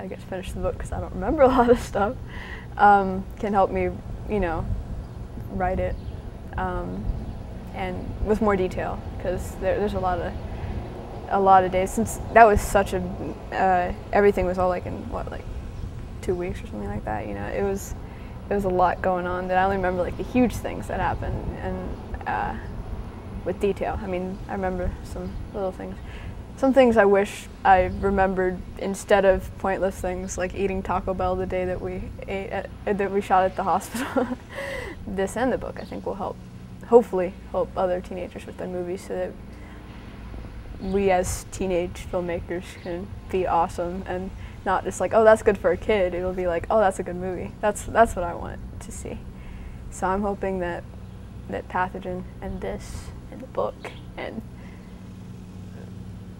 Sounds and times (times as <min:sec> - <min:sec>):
Speech: 0:00.0 - 0:02.2, 0:02.8 - 0:04.7, 0:05.4 - 0:06.0, 0:06.6 - 0:07.1, 0:07.7 - 0:10.4, 0:11.3 - 0:15.4, 0:16.2 - 0:22.7, 0:23.4 - 0:26.0, 0:26.6 - 0:34.4, 0:35.0 - 0:39.4, 0:40.8 - 0:49.2, 0:49.9 - 0:50.8, 0:51.5 - 0:54.4.